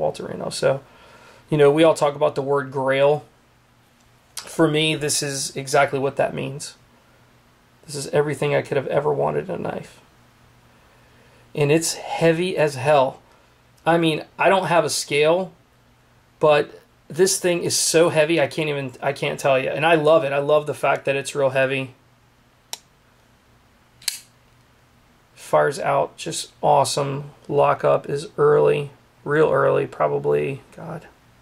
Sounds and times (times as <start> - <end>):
Speech: 0.0 - 0.9, 1.5 - 3.3, 4.4 - 6.8, 7.9 - 10.0, 11.6 - 13.2, 13.8 - 15.6, 16.4 - 22.0, 25.4 - 31.2
Inside, small room: 0.0 - 31.4.